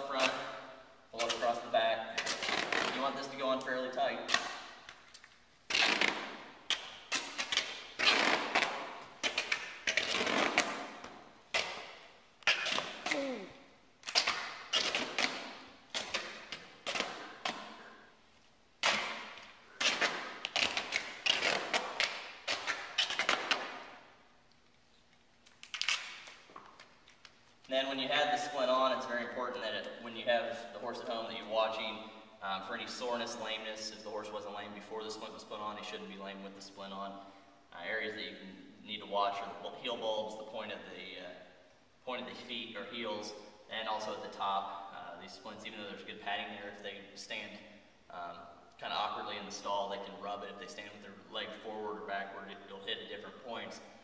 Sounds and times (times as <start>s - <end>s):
Speech: 0.0s - 2.2s, 2.8s - 4.3s, 27.7s - 41.4s, 42.0s - 53.8s.